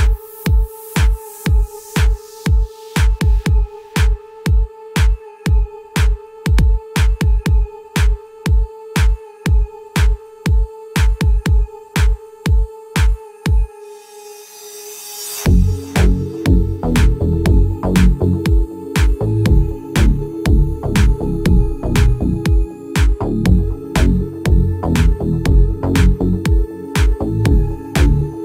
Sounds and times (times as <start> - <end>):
Music: 0.0 - 28.4.